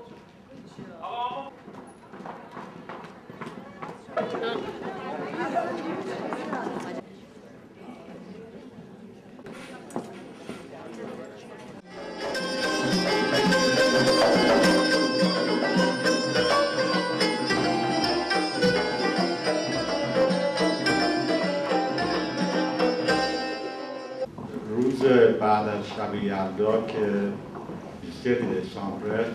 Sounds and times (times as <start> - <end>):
Music: 11.9 - 24.3.